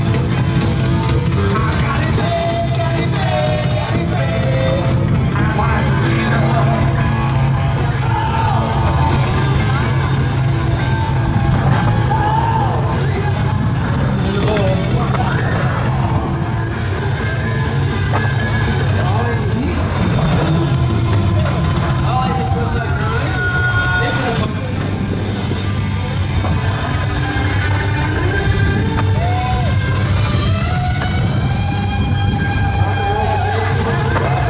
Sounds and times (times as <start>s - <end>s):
Music: 0.0s - 34.4s
Skateboard: 13.8s - 18.9s, 26.4s - 34.4s
Speech: 14.2s - 15.6s, 22.0s - 24.8s.